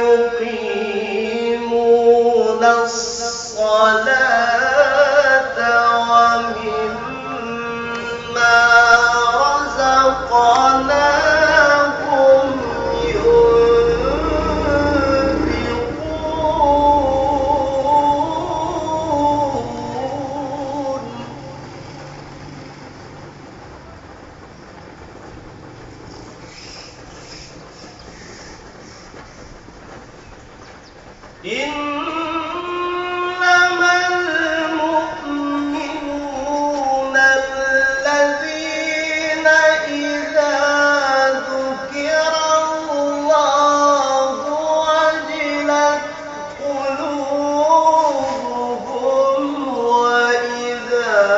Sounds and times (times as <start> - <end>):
Outside, urban or manmade: 0.0 - 51.3.